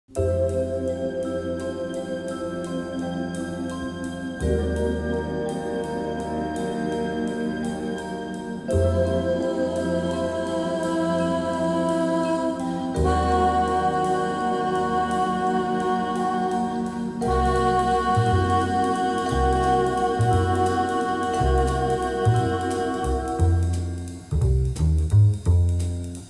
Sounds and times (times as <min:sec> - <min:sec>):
Vibraphone: 0:00.2 - 0:24.4.